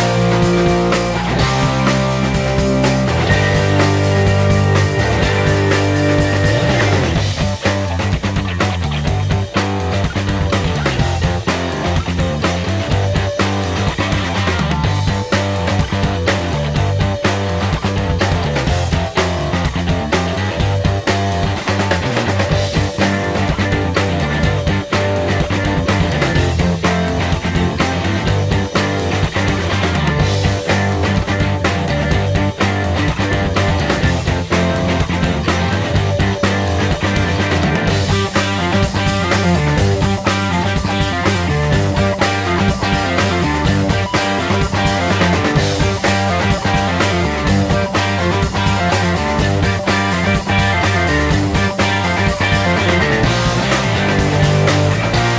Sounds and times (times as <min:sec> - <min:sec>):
Funk: 0:00.0 - 0:55.3.